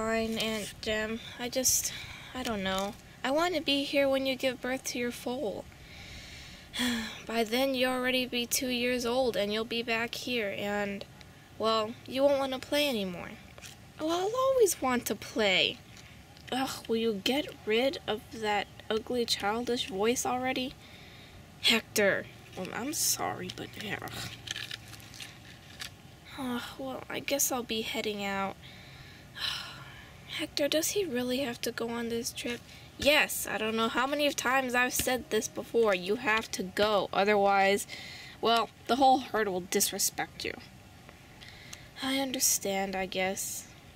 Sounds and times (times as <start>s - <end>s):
Speech: 0.0s - 5.6s, 6.8s - 13.4s, 14.0s - 15.8s, 16.5s - 20.8s, 21.6s - 24.4s, 26.3s - 28.6s, 30.3s - 40.7s, 42.0s - 43.7s.